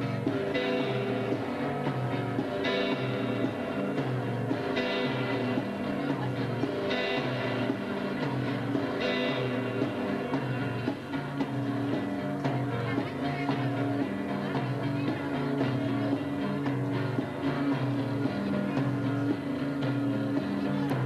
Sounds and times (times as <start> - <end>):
Music: 0.0 - 21.0
Speech: 0.0 - 21.0.